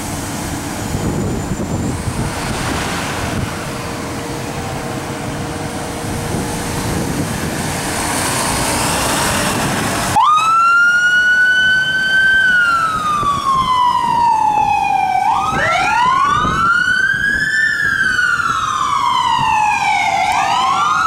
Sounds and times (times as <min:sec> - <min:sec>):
Fire engine, fire truck (siren): 0:00.0 - 0:21.0.